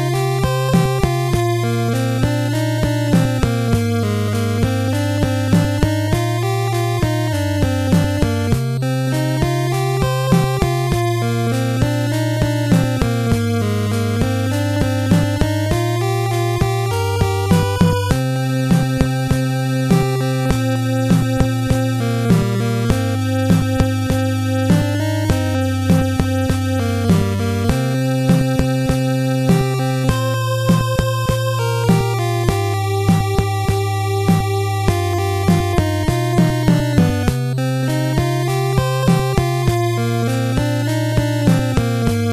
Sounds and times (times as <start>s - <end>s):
Music: 0.0s - 42.3s.